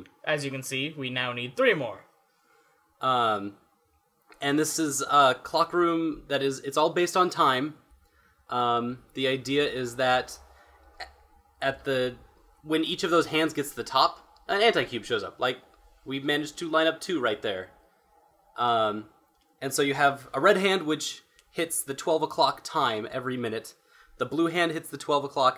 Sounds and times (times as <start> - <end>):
Speech: 0.0 - 2.1, 3.0 - 3.6, 4.4 - 7.8, 8.5 - 10.4, 11.6 - 17.7, 18.6 - 25.5.